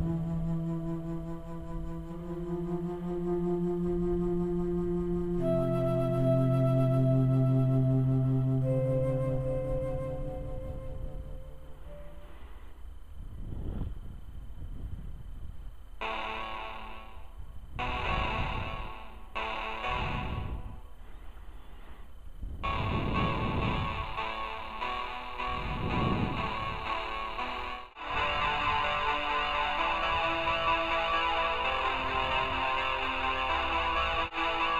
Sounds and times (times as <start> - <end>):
Music: 0.0 - 12.8, 16.0 - 21.4, 22.6 - 34.7.